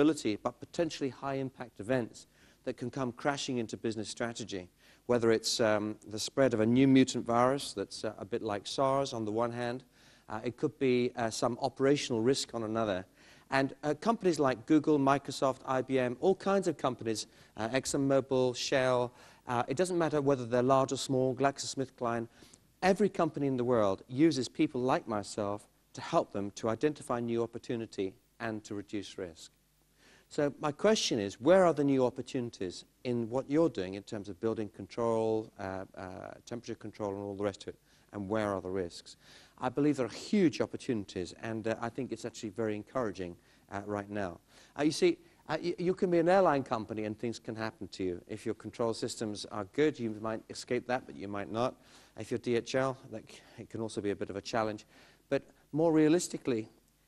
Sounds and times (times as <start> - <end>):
Speech: 0.0 - 29.5, 30.3 - 56.8.